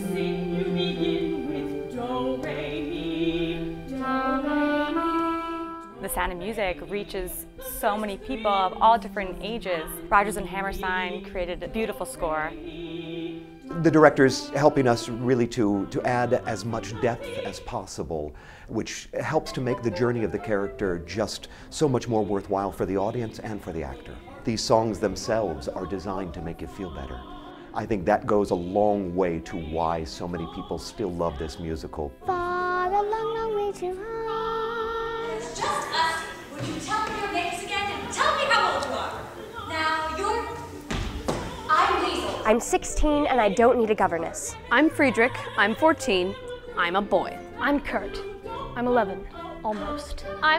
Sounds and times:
Tender music: 0.0 - 36.6, 37.5 - 50.5.

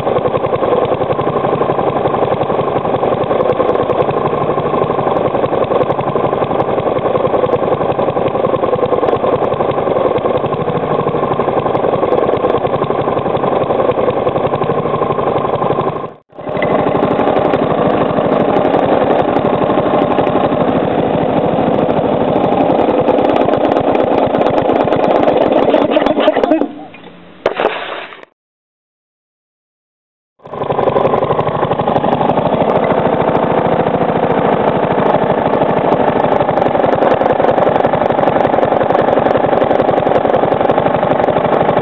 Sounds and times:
Lawn mower: 0.0 - 28.3, 30.4 - 41.8.

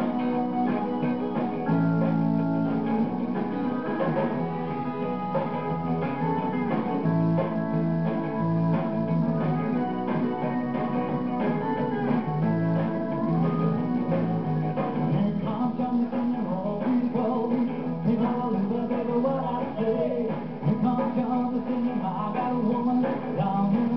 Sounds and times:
Music: 0.0 - 23.9.

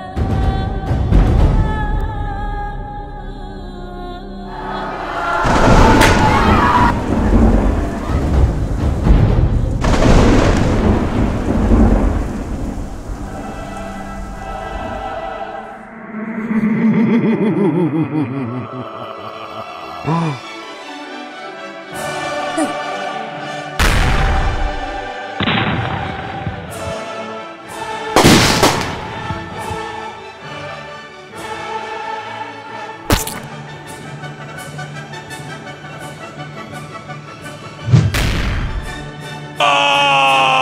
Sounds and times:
Rain: 5.2 - 15.6
Thunder: 5.3 - 15.0, 25.4 - 26.8.

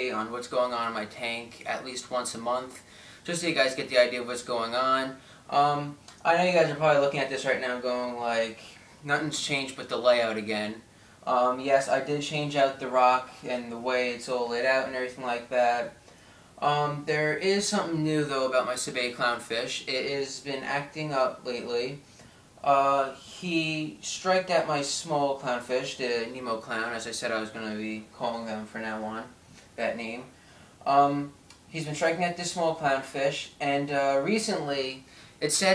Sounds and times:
Speech: 0.0 - 16.0, 16.6 - 22.0, 22.6 - 35.7.

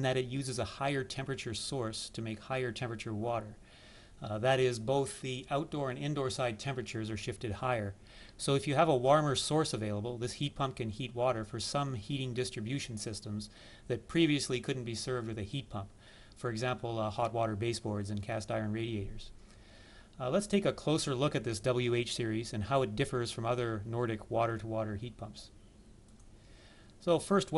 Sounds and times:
Speech: 0.0 - 3.6, 4.2 - 19.3, 20.2 - 25.5, 27.0 - 27.5.

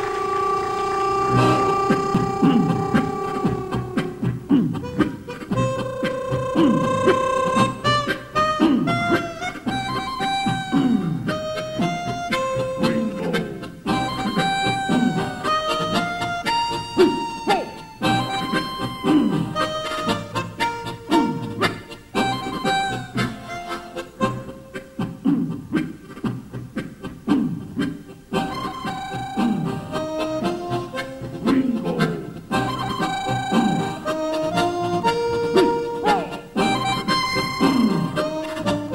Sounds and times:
Harmonica: 0.0 - 38.9.

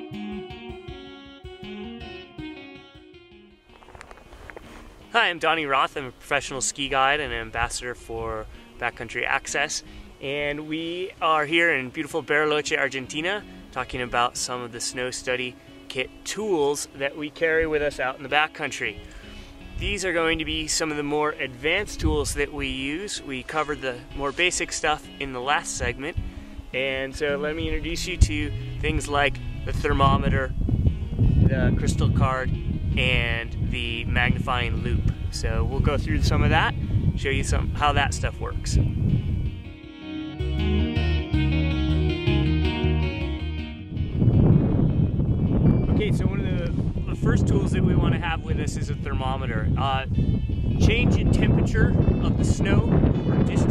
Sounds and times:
Music: 0.0 - 53.7
Speech: 5.1 - 19.0, 19.8 - 26.2, 26.8 - 30.5, 31.5 - 38.8, 45.9 - 50.1, 50.8 - 53.7.

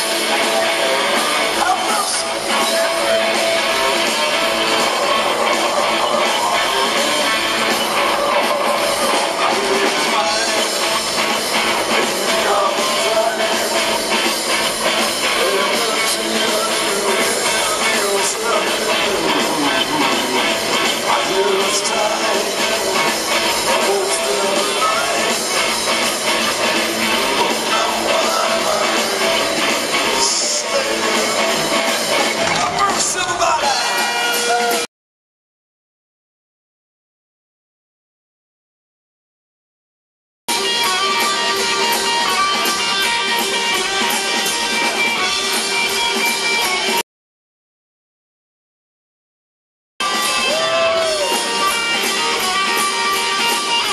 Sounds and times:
Guitar: 0.0 - 34.9, 40.5 - 47.0, 50.0 - 53.9.

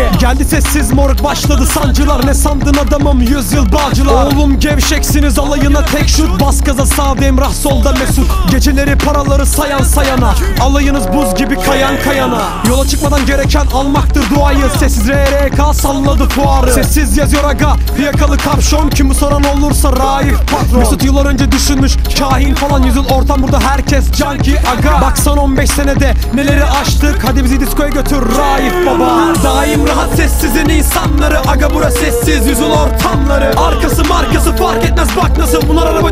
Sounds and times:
Music: 0.0 - 36.1.

